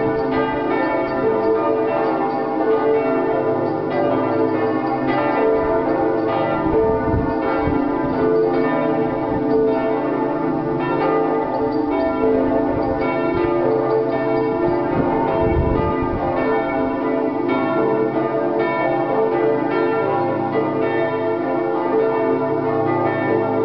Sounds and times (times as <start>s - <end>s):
Change ringing (campanology): 0.0s - 23.6s.